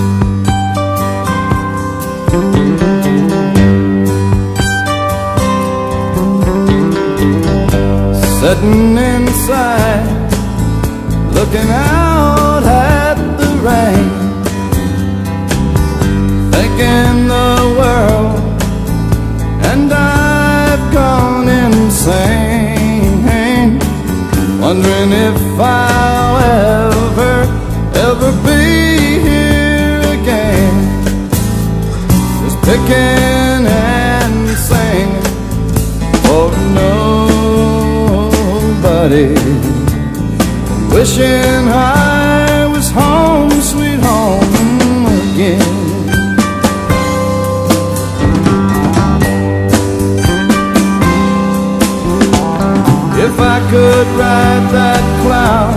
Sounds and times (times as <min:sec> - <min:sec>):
Music: 0:00.0 - 0:55.7.